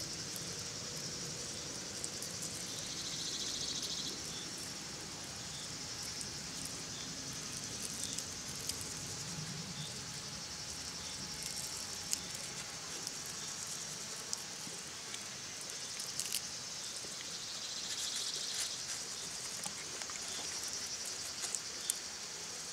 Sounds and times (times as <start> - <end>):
Insect: 0.0 - 22.7.